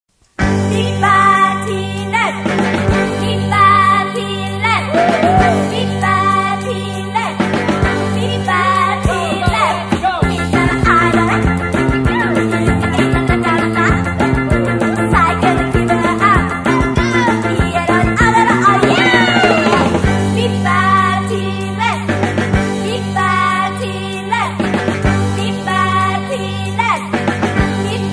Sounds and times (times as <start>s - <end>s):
Jingle (music): 0.4s - 28.1s.